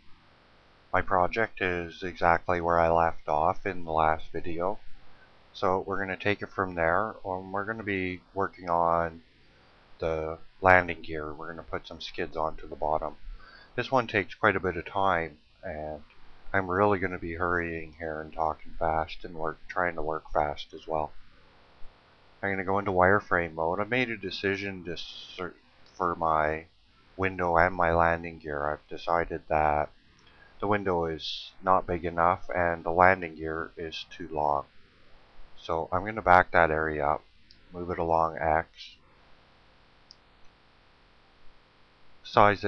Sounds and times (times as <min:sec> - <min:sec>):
Speech: 0:01.0 - 0:04.8, 0:05.6 - 0:09.2, 0:10.0 - 0:13.2, 0:13.8 - 0:16.0, 0:16.6 - 0:21.1, 0:22.4 - 0:26.6, 0:27.2 - 0:29.9, 0:30.6 - 0:34.7, 0:35.6 - 0:37.2, 0:37.8 - 0:38.9, 0:42.3 - 0:42.6.